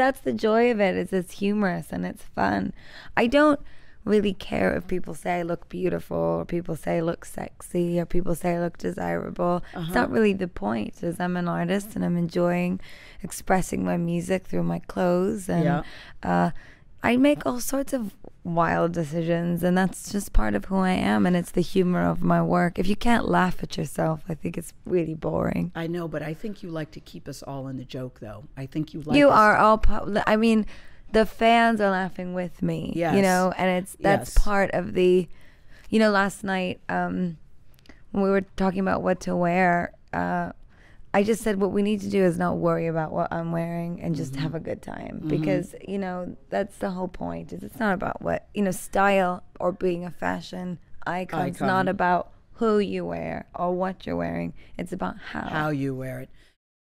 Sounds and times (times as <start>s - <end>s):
Speech: 0.0s - 30.6s, 31.2s - 35.3s, 41.2s - 56.3s.